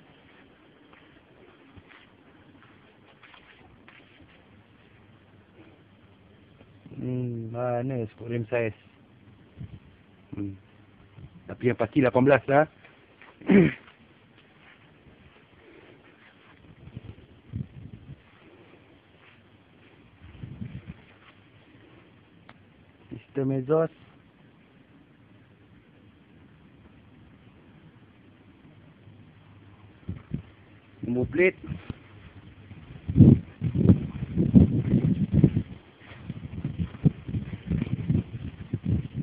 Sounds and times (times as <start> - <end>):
Speech: 6.9 - 8.8, 10.3 - 10.6, 11.5 - 12.8, 23.1 - 24.0, 31.0 - 31.8.